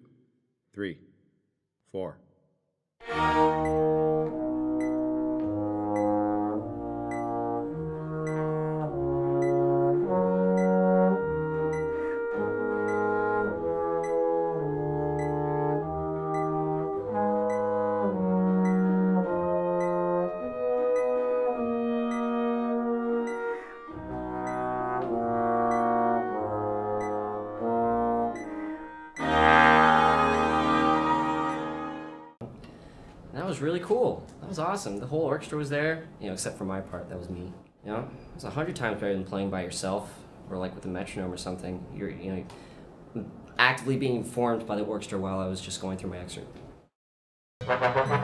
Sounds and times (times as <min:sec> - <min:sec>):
Trombone: 0:03.0 - 0:32.3, 0:47.6 - 0:48.2
Trumpet: 0:03.0 - 0:32.4, 0:47.6 - 0:48.2.